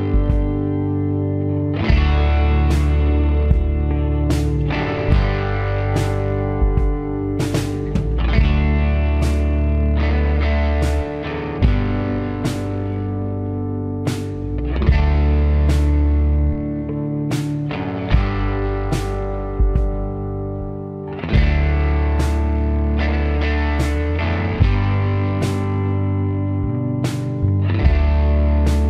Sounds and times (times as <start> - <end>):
Distortion: 0.0 - 28.8
Music: 0.0 - 28.8.